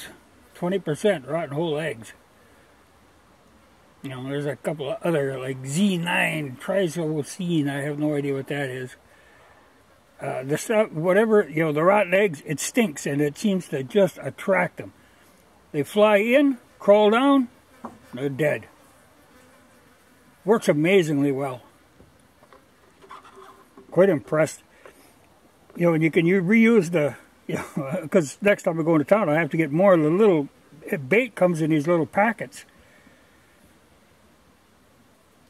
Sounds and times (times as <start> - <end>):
Bee, wasp, etc.: 0.0 - 35.4
Fly, housefly: 16.1 - 23.9.